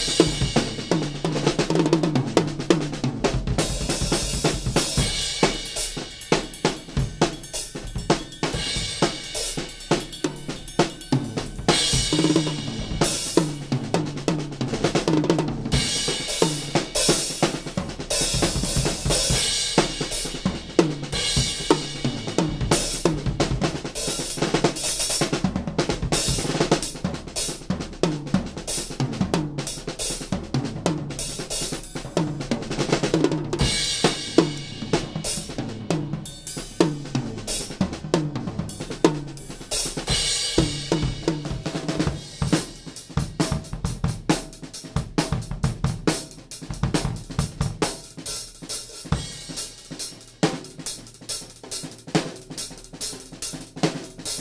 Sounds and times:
Bass drum: 0.0 - 29.7, 30.3 - 48.2
Drum kit: 0.0 - 54.4
Snare drum: 0.0 - 54.4.

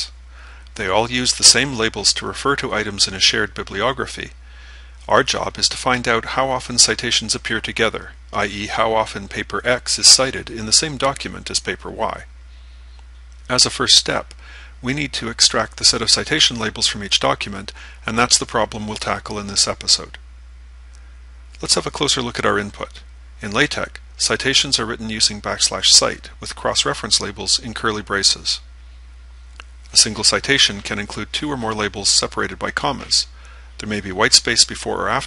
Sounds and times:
Speech: 0.8 - 4.4, 5.1 - 12.3, 13.5 - 20.2, 21.6 - 28.7, 29.9 - 35.2.

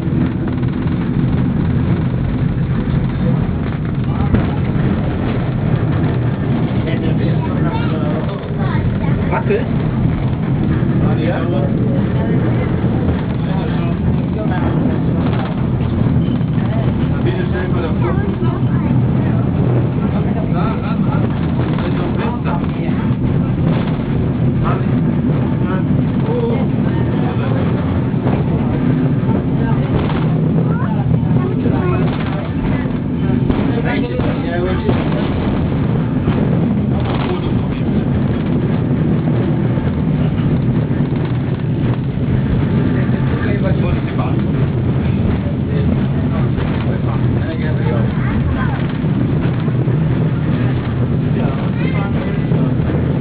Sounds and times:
Vehicle: 0.0 - 53.2.

